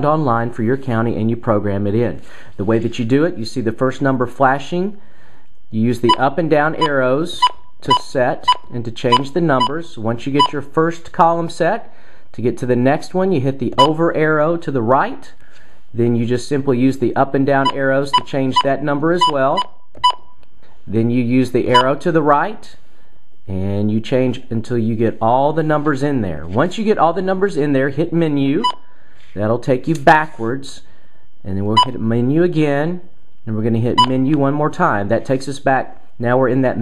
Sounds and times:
Speech: 0:00.0 - 0:05.0, 0:05.7 - 0:15.4, 0:16.0 - 0:19.6, 0:20.9 - 0:22.8, 0:23.5 - 0:28.7, 0:29.4 - 0:36.8
Inside, small room: 0:00.0 - 0:36.8.

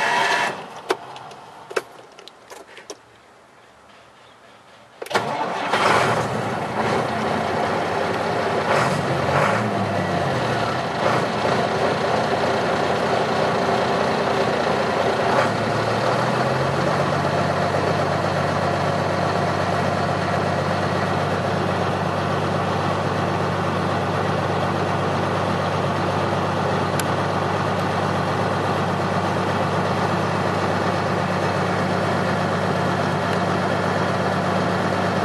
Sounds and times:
Vehicle: 0:00.0 - 0:35.2
Idling: 0:05.0 - 0:35.2.

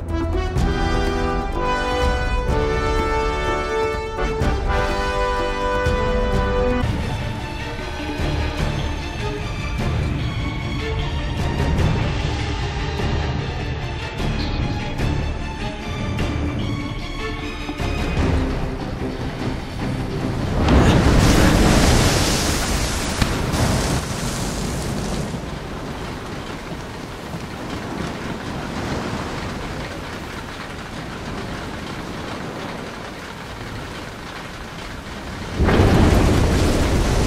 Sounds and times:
Music: 0:00.0 - 0:21.9.

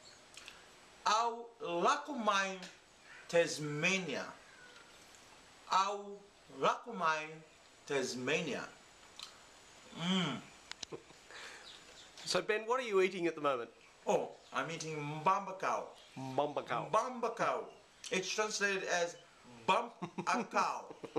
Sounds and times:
Speech: 0:01.1 - 0:04.4, 0:05.7 - 0:08.8, 0:12.2 - 0:21.1.

